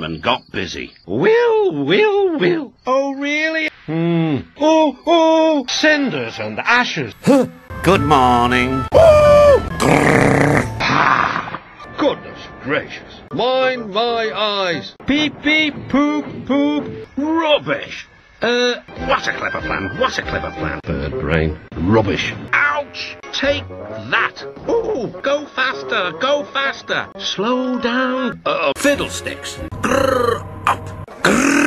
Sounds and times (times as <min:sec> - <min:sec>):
Speech: 0:00.0 - 0:08.8, 0:12.0 - 0:30.9.